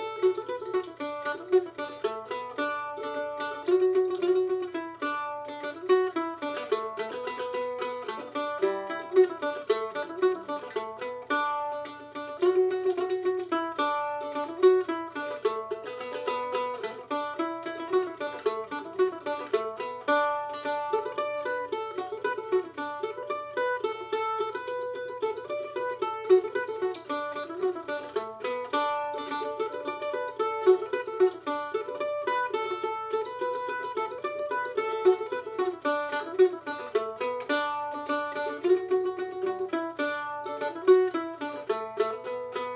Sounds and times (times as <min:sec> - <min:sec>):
Mandolin: 0:00.0 - 0:42.7.